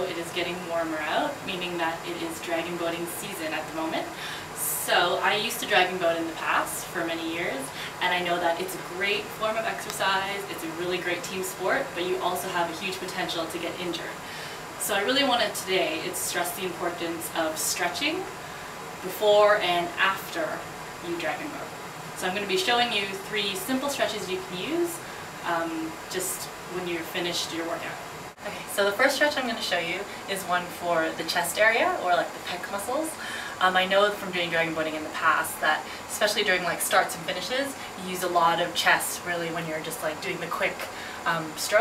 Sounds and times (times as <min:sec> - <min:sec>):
Speech: 0:00.0 - 0:14.2, 0:14.8 - 0:18.4, 0:19.0 - 0:41.8.